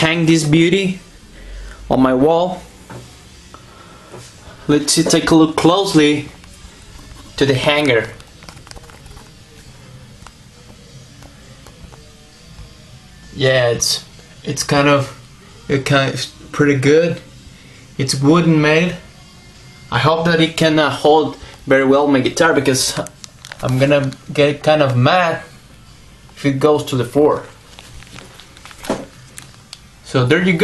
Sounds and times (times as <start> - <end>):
Speech: 0.0 - 1.0, 1.9 - 2.7, 4.7 - 6.4, 7.4 - 8.2, 13.3 - 17.3, 18.0 - 19.0, 19.9 - 25.5, 26.4 - 27.5, 30.1 - 30.6.